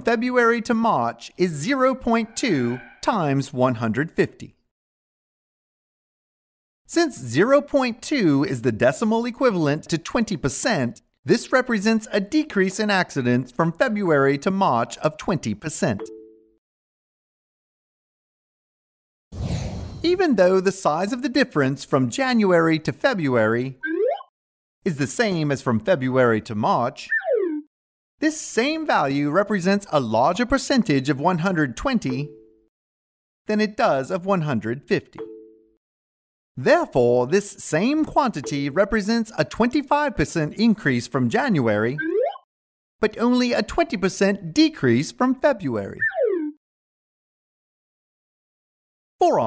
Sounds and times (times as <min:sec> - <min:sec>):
Speech: 0:00.0 - 0:04.6, 0:06.9 - 0:16.1, 0:20.1 - 0:23.8, 0:24.9 - 0:27.1, 0:28.2 - 0:32.3, 0:33.5 - 0:35.2, 0:36.6 - 0:42.0, 0:43.0 - 0:46.0, 0:49.2 - 0:49.4.